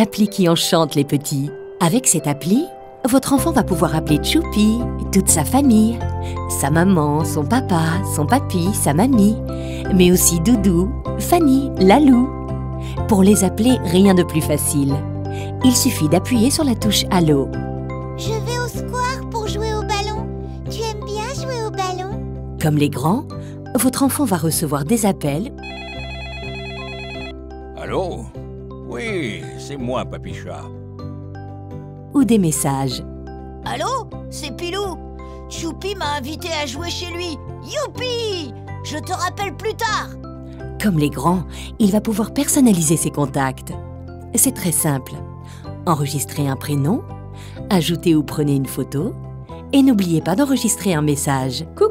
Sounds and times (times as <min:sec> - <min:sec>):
Music: 0:00.0 - 0:51.9
Speech: 0:10.0 - 0:12.3, 0:15.6 - 0:17.5, 0:23.8 - 0:25.5, 0:27.8 - 0:28.3, 0:28.9 - 0:30.7, 0:45.9 - 0:47.0, 0:49.8 - 0:51.9.